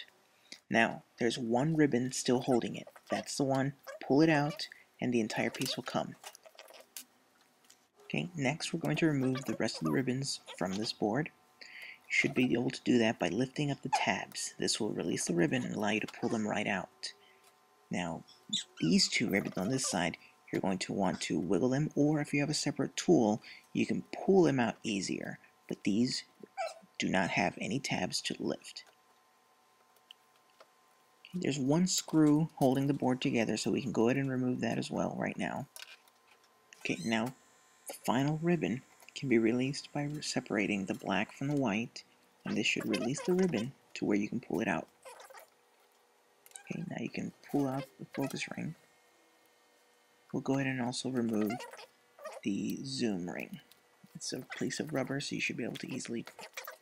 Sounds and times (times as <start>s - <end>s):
Speech: 0.0s - 6.2s, 8.1s - 11.4s, 12.1s - 17.2s, 17.9s - 26.4s, 27.0s - 28.9s, 31.3s - 35.7s, 36.8s - 44.9s, 46.6s - 48.8s, 50.3s - 51.7s, 52.4s - 56.4s.